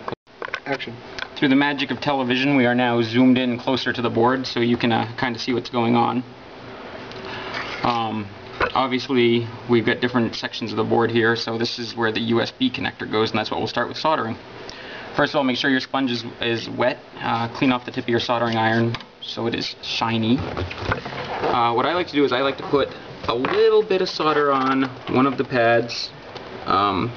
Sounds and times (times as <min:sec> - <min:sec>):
Inside, small room: 0:00.0 - 0:27.1
Speech: 0:00.6 - 0:06.3, 0:07.8 - 0:14.4, 0:15.2 - 0:20.6, 0:21.4 - 0:27.1.